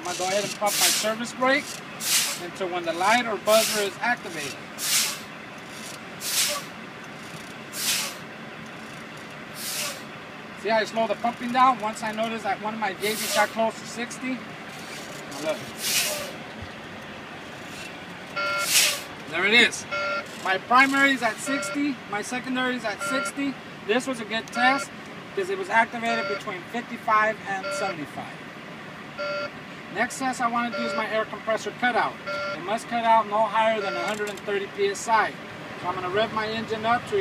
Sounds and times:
Speech: 0.0 - 1.7, 2.4 - 4.6, 10.6 - 14.4, 19.3 - 28.4, 30.0 - 37.2.

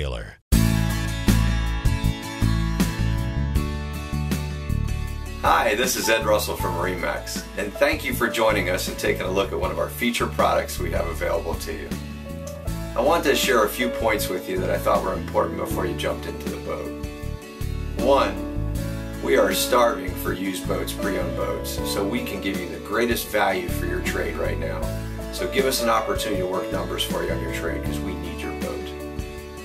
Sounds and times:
Speech: 0.0 - 0.4, 5.5 - 11.9, 13.0 - 16.9, 18.0 - 18.4, 19.2 - 24.8, 25.4 - 29.0
Music: 0.5 - 29.6.

